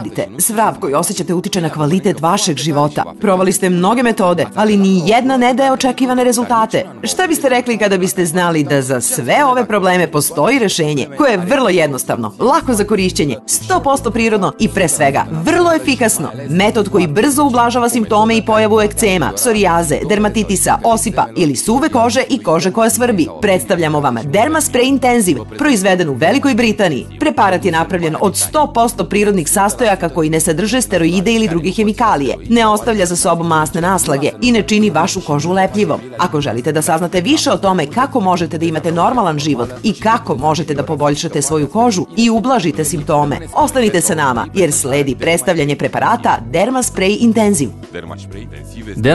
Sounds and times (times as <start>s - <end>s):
Music: 0.0s - 49.1s
Speech: 0.0s - 49.1s.